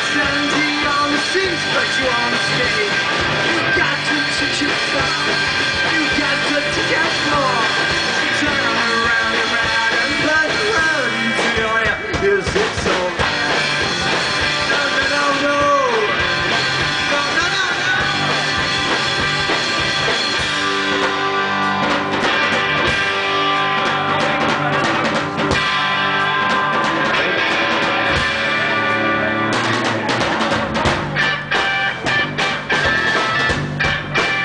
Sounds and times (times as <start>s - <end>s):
Music: 0.0s - 34.4s.